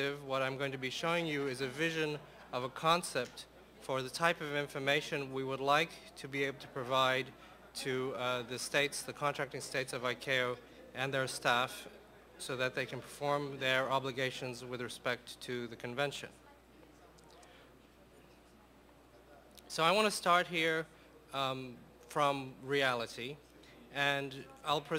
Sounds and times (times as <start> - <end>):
Speech: 0.0 - 24.9.